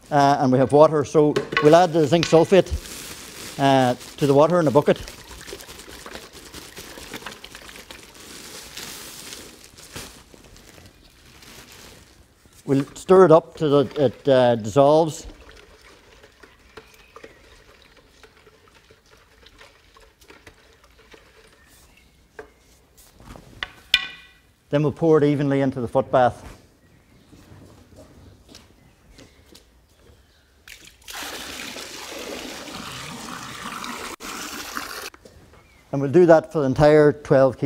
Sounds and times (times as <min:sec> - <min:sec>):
Speech: 0:00.1 - 0:02.8, 0:03.6 - 0:05.1, 0:12.7 - 0:15.3, 0:24.7 - 0:26.6, 0:35.9 - 0:37.6
Water: 0:04.8 - 0:08.2, 0:13.6 - 0:21.2, 0:30.7 - 0:35.1.